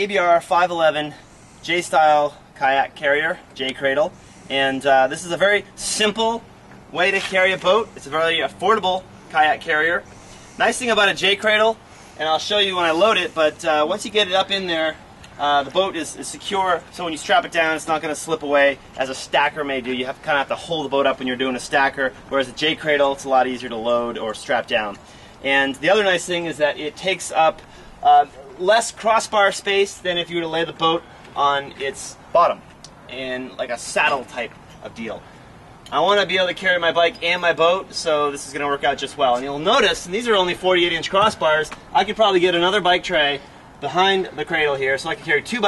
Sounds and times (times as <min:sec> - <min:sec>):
Speech: 0:00.0 - 0:10.0, 0:10.6 - 0:35.2, 0:35.9 - 0:45.6.